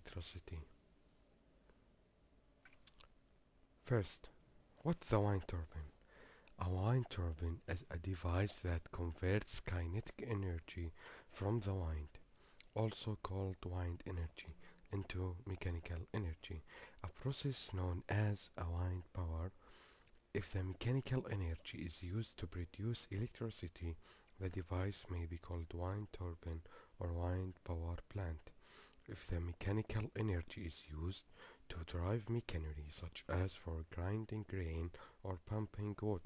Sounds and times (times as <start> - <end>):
Speech: 0.0 - 0.8, 3.8 - 19.6, 20.3 - 36.2.